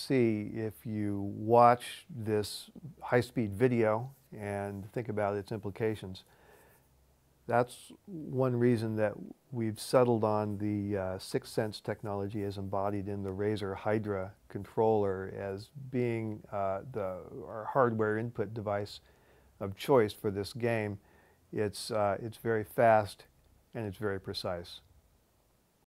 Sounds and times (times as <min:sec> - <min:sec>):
Speech: 0:00.0 - 0:06.2, 0:07.5 - 0:19.0, 0:19.6 - 0:24.9.